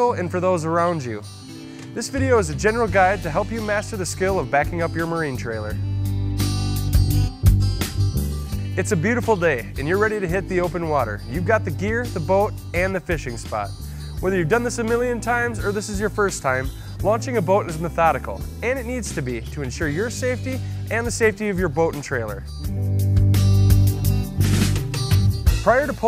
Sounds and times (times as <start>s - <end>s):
Speech: 0.0s - 1.2s, 2.0s - 5.8s, 8.8s - 22.5s, 25.6s - 26.0s
Music: 0.0s - 26.0s.